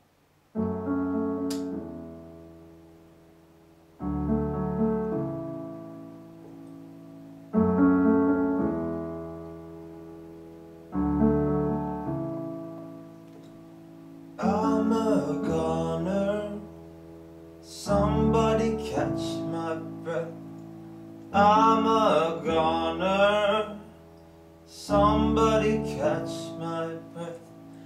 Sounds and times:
Piano: 0.0s - 27.8s.

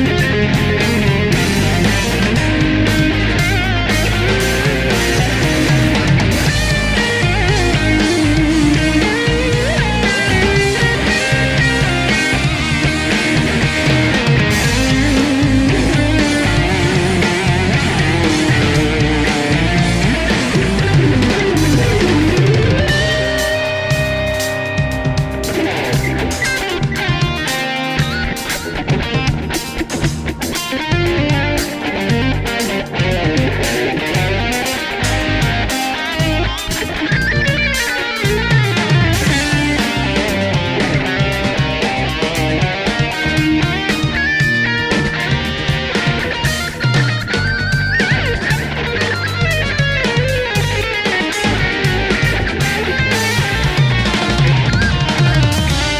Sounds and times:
Electric guitar: 0.0s - 55.9s.

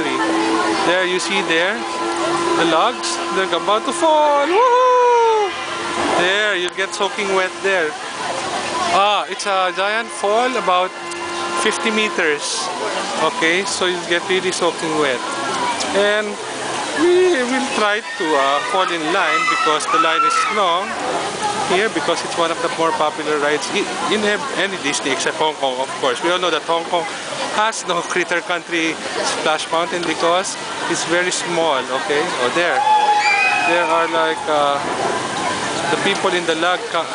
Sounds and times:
Water: 0.0s - 37.1s.

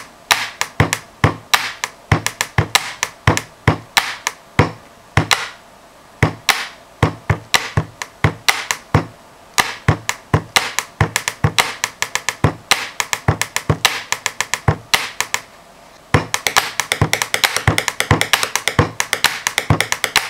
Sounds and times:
Inside, small room: 0.0s - 20.2s.

